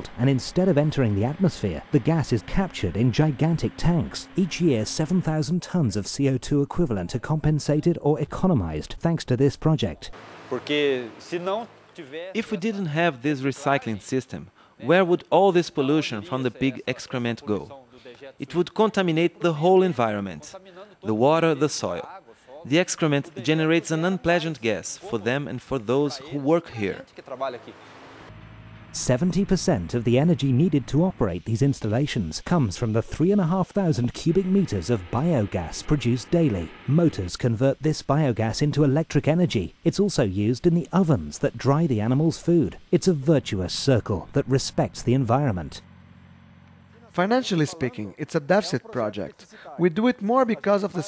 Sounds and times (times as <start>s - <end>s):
Speech: 0.0s - 27.8s, 29.0s - 45.8s, 47.0s - 51.0s.